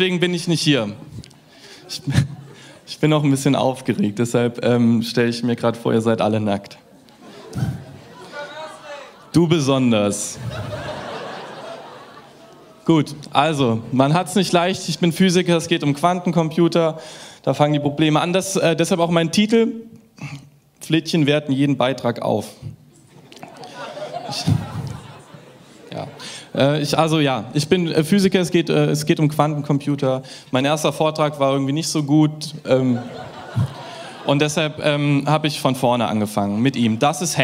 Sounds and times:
Speech: 0.0s - 1.0s, 2.9s - 6.9s, 8.2s - 10.4s, 12.8s - 19.9s, 20.8s - 22.7s, 25.9s - 33.1s, 34.3s - 37.4s.

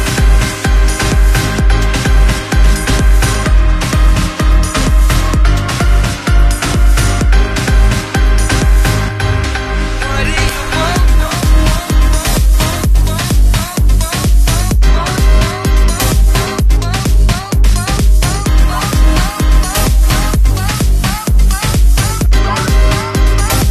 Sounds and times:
House music: 0.0s - 23.7s.

